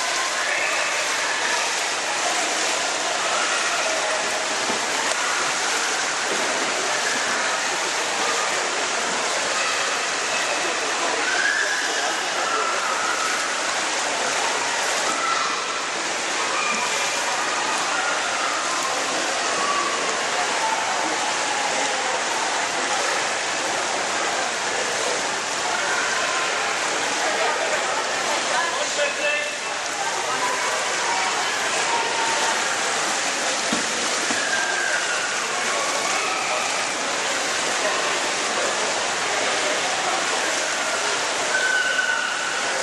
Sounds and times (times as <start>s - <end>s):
Speech: 0.0s - 42.8s
Trickle, dribble: 0.0s - 42.8s
Water: 0.0s - 42.8s.